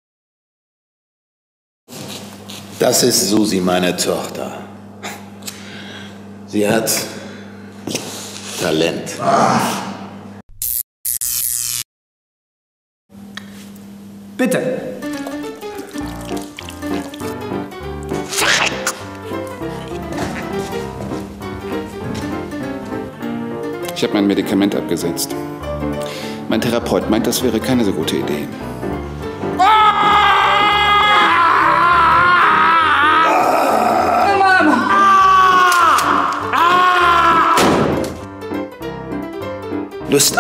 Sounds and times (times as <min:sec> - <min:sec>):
Speech: 0:02.8 - 0:04.7, 0:06.5 - 0:07.2, 0:08.6 - 0:09.7, 0:14.4 - 0:15.0, 0:24.0 - 0:25.4, 0:26.5 - 0:28.5, 0:40.1 - 0:40.4
Music: 0:14.5 - 0:40.4.